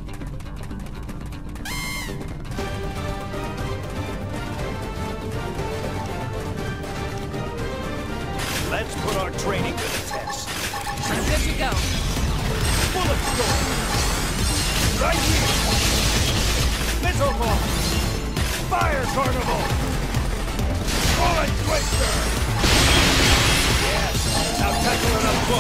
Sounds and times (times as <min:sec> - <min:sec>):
Gunshot, gunfire: 0:20.8 - 0:24.4.